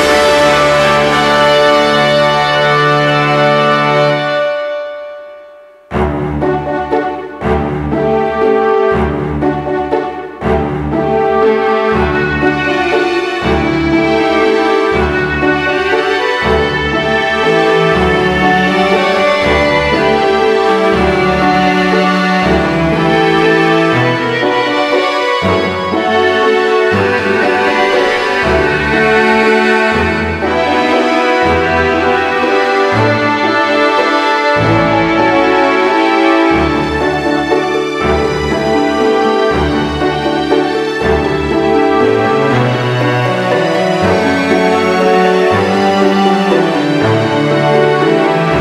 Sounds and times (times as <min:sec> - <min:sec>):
Music: 0:00.0 - 0:48.6.